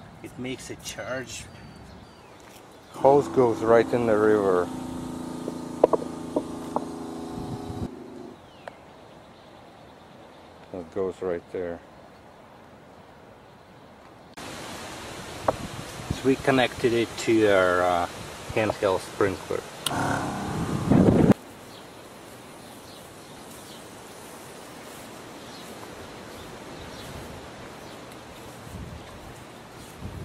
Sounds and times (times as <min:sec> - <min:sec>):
Speech: 0:00.2 - 0:01.5, 0:03.0 - 0:04.7, 0:10.7 - 0:11.8, 0:16.1 - 0:20.2.